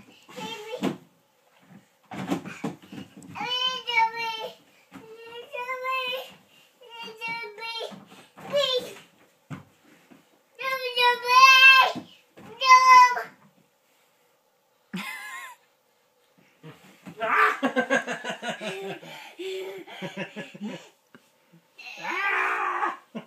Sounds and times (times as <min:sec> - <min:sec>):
Child speech, kid speaking: 0:00.3 - 0:00.9, 0:03.4 - 0:09.0, 0:10.6 - 0:13.3
Belly laugh: 0:15.0 - 0:15.6, 0:17.3 - 0:20.9.